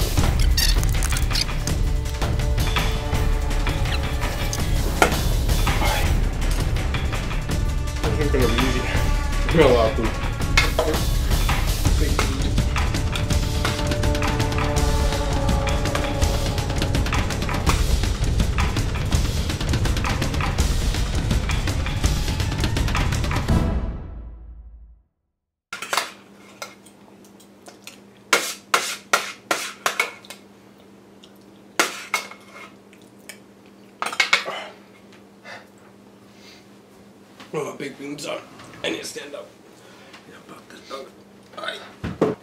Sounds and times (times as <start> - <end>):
Speech: 8.1 - 10.2, 12.0 - 12.6, 37.5 - 39.5.